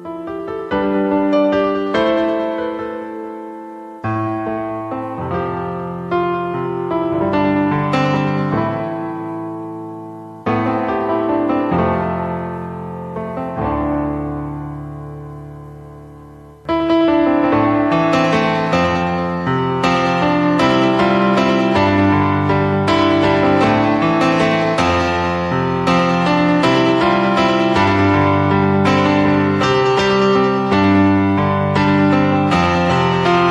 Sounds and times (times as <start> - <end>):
Music: 0.0 - 33.5.